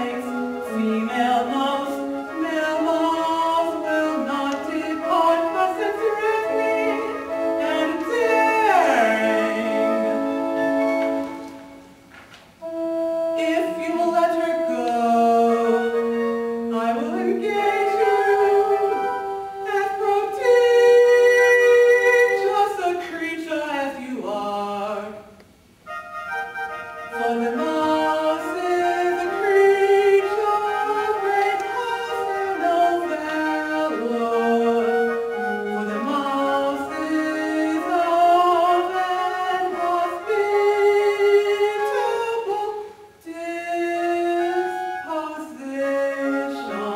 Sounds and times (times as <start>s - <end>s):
Music: 0.0s - 46.9s.